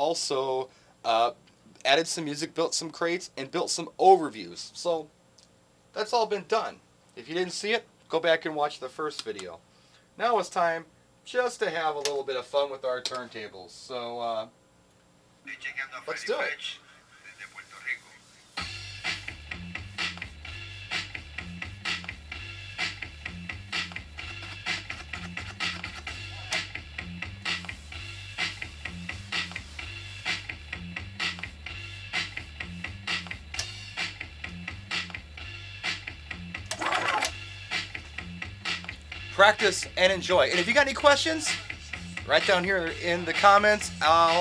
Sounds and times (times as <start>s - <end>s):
Scratching (performance technique): 20.9s - 30.5s, 36.7s - 39.0s.